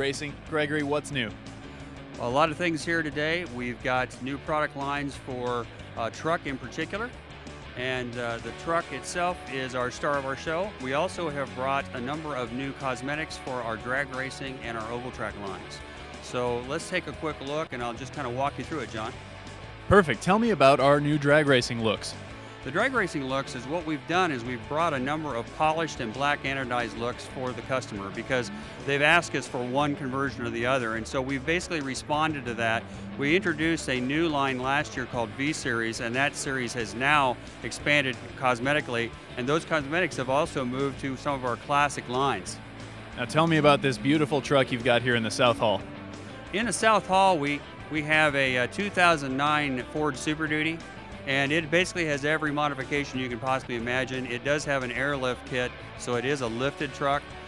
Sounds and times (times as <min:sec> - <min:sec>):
Speech: 0:00.0 - 0:01.4, 0:02.2 - 0:07.1, 0:07.8 - 0:19.2, 0:19.9 - 0:42.6, 0:43.2 - 0:45.8, 0:46.5 - 0:57.2
Music: 0:00.0 - 0:57.4.